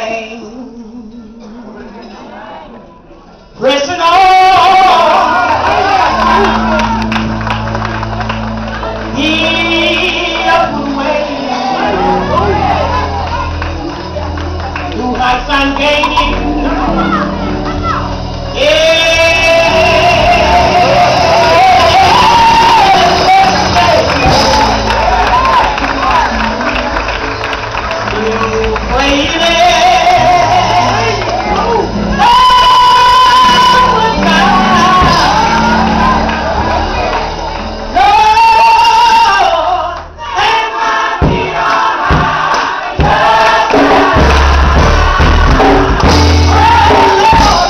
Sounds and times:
Male singing: 0:00.0 - 0:02.2, 0:03.6 - 0:06.9, 0:09.1 - 0:13.0, 0:14.9 - 0:17.2, 0:18.5 - 0:26.7, 0:28.0 - 0:36.2, 0:37.9 - 0:41.9, 0:46.4 - 0:47.6
Music: 0:03.4 - 0:47.6.

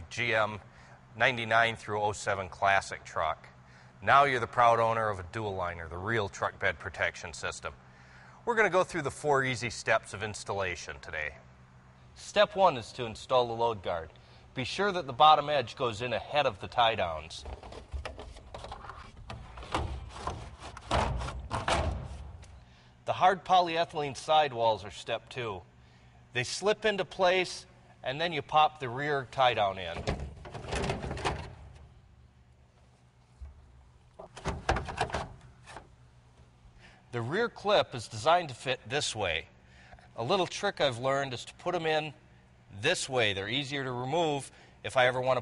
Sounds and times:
Speech: 0:00.0 - 0:07.8, 0:08.5 - 0:11.4, 0:12.2 - 0:17.5, 0:23.1 - 0:25.7, 0:26.3 - 0:30.1, 0:37.1 - 0:39.5, 0:40.2 - 0:45.4.

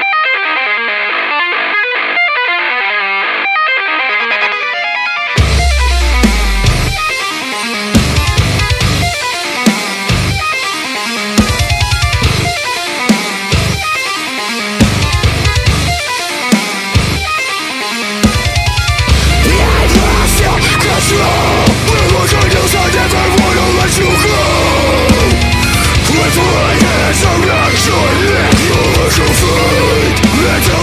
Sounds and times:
Electric guitar: 0:00.0 - 0:30.8
Strum: 0:05.4 - 0:07.2, 0:19.1 - 0:30.8.

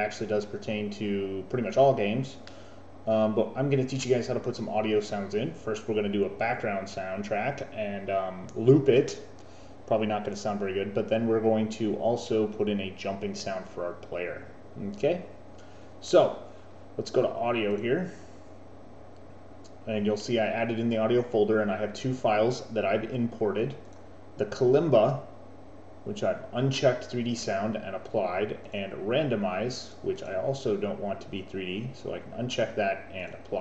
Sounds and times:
Speech: 0:00.0 - 0:02.5, 0:03.1 - 0:09.3, 0:09.9 - 0:15.4, 0:16.0 - 0:18.2, 0:19.8 - 0:23.8, 0:24.4 - 0:25.3, 0:26.1 - 0:33.6.

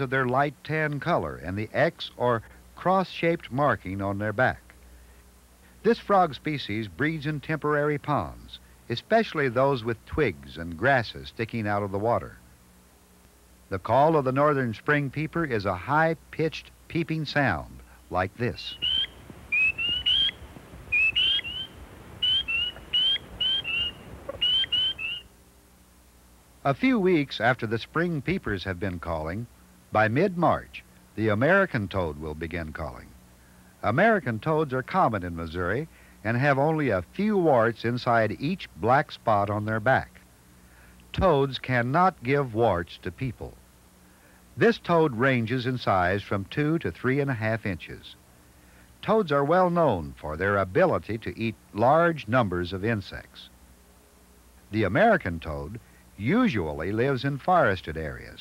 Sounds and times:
Speech: 0:00.0 - 0:04.7, 0:05.8 - 0:12.4, 0:13.7 - 0:18.8, 0:26.6 - 0:33.2, 0:33.8 - 0:40.2, 0:41.1 - 0:43.6, 0:44.6 - 0:48.2, 0:49.0 - 0:53.5, 0:54.7 - 0:58.4
Frog: 0:18.7 - 0:25.3.

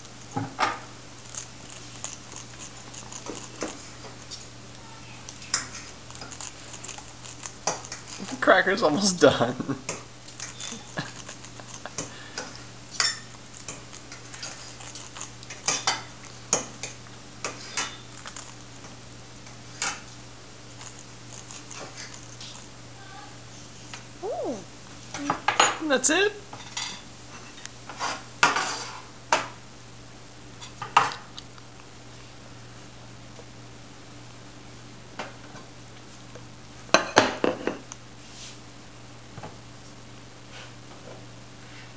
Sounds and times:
Speech: 0:24.2 - 0:26.5.

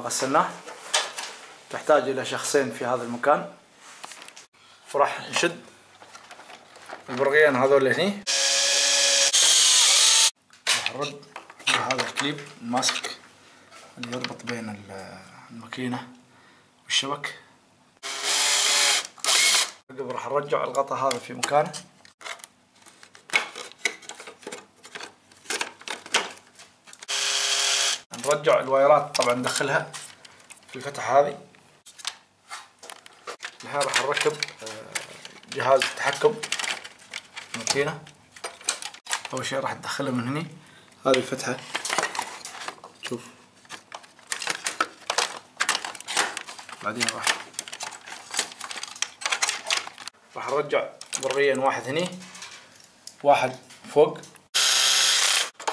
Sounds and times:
Speech: 0:00.0 - 0:00.6, 0:01.7 - 0:03.6, 0:04.9 - 0:05.7, 0:07.1 - 0:08.3, 0:10.8 - 0:13.2, 0:14.0 - 0:16.2, 0:16.9 - 0:17.5, 0:19.9 - 0:21.9, 0:28.1 - 0:30.0, 0:30.7 - 0:31.5, 0:33.6 - 0:36.5, 0:37.5 - 0:38.1, 0:39.3 - 0:41.7, 0:43.0 - 0:43.4, 0:46.8 - 0:47.4, 0:50.4 - 0:52.3, 0:53.2 - 0:54.4
Drill: 0:08.3 - 0:10.4, 0:18.0 - 0:19.8, 0:27.0 - 0:28.1, 0:54.6 - 0:55.6.

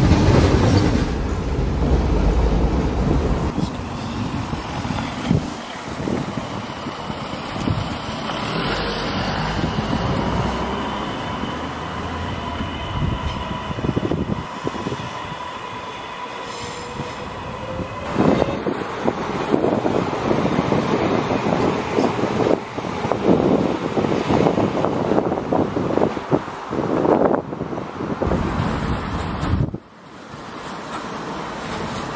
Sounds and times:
Train: 0:00.0 - 0:32.1
Wind: 0:00.0 - 0:32.1.

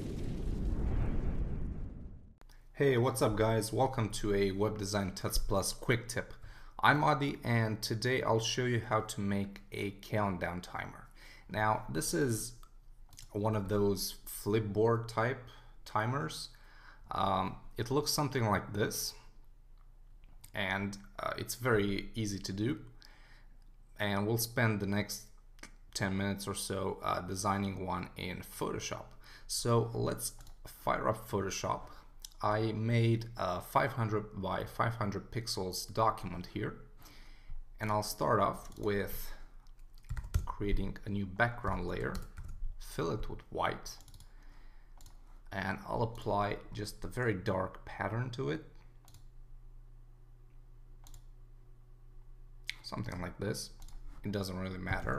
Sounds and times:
Speech: 0:02.8 - 0:12.6, 0:13.2 - 0:19.3, 0:20.5 - 0:22.9, 0:24.0 - 0:25.4, 0:26.0 - 0:36.9, 0:37.8 - 0:39.5, 0:40.4 - 0:44.1, 0:45.5 - 0:48.8, 0:52.7 - 0:55.1.

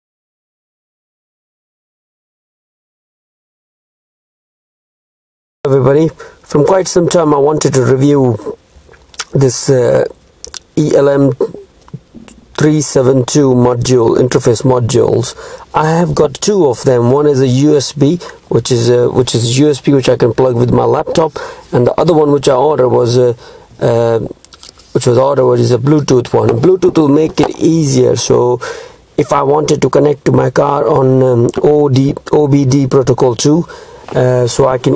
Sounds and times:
Speech: 0:05.7 - 0:08.6, 0:09.2 - 0:34.9.

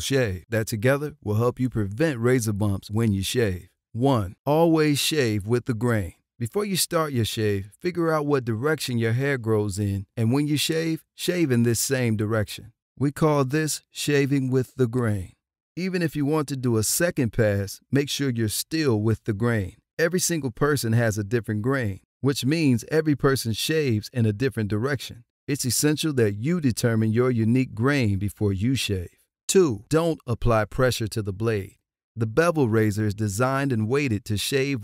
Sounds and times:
Speech: 0:00.0 - 0:34.8.

